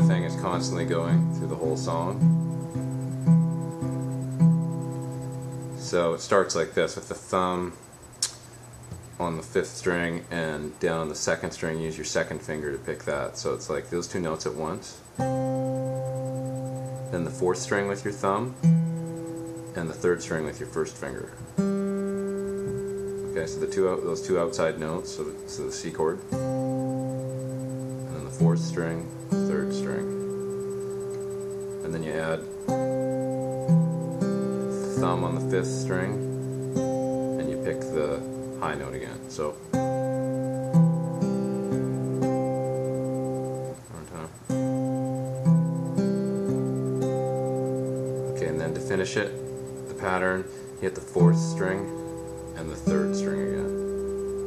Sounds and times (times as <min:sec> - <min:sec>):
Speech: 0:00.0 - 0:02.2, 0:05.8 - 0:07.8, 0:09.2 - 0:15.0, 0:17.1 - 0:18.6, 0:19.8 - 0:21.4, 0:23.3 - 0:26.2, 0:28.1 - 0:30.1, 0:31.8 - 0:32.5, 0:34.8 - 0:36.2, 0:37.4 - 0:39.6, 0:43.9 - 0:44.3, 0:48.3 - 0:52.0, 0:52.6 - 0:53.8
Music: 0:00.0 - 0:05.8, 0:15.2 - 0:20.3, 0:21.6 - 0:24.6, 0:26.2 - 0:31.9, 0:32.5 - 0:38.7, 0:39.6 - 0:43.8, 0:44.5 - 0:50.0, 0:51.2 - 0:54.4.